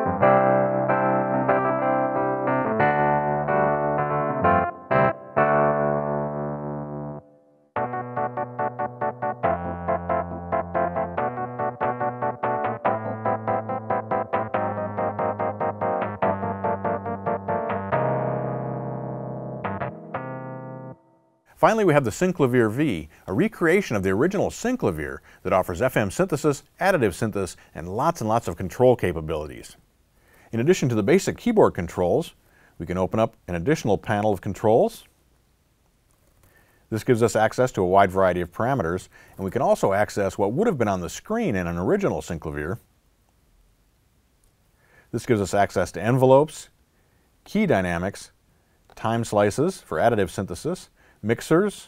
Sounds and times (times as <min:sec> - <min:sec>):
Electric piano: 0:00.0 - 0:21.4.